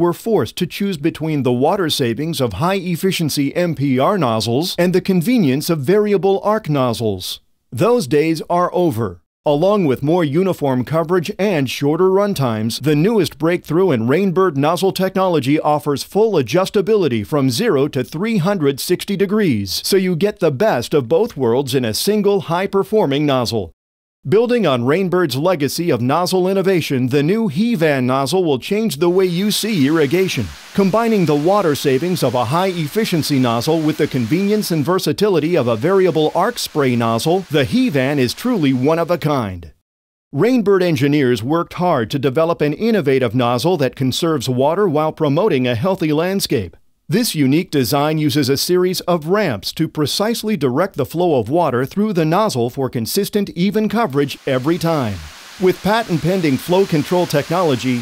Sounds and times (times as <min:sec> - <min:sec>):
Speech: 0:00.0 - 0:39.8, 0:40.4 - 0:58.0.